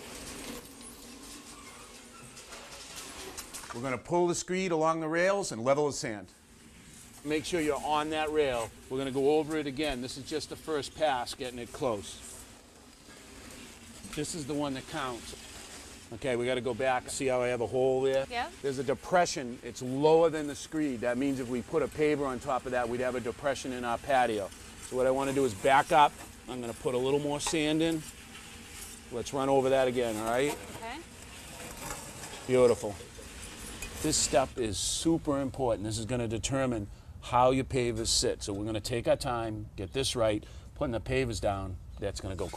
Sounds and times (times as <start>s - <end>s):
Outside, rural or natural: 6.4s - 42.5s
Speech: 32.5s - 33.0s, 34.0s - 42.5s.